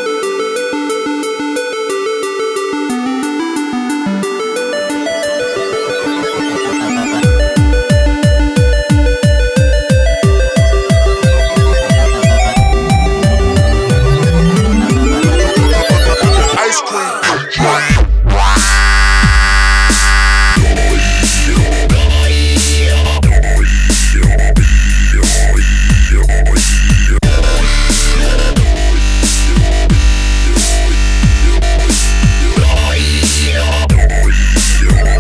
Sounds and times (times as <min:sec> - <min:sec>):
Music: 0:00.0 - 0:35.2
Speech: 0:16.4 - 0:18.1.